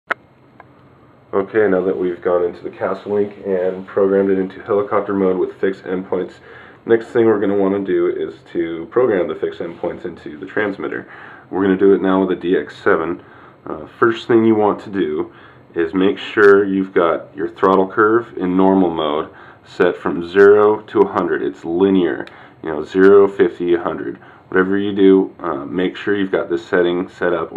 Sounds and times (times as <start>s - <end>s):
Inside, small room: 0.0s - 27.5s
Speech: 1.3s - 27.5s.